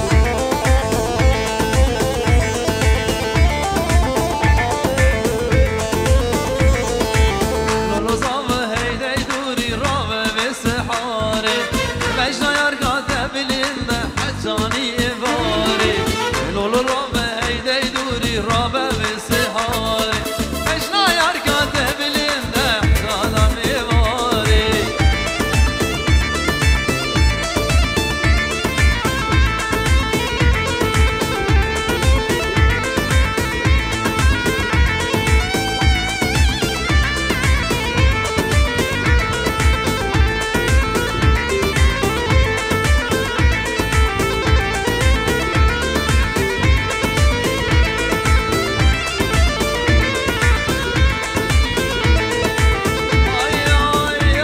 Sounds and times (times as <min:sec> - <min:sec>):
Wedding music: 0:00.0 - 0:09.4, 0:10.5 - 0:54.4.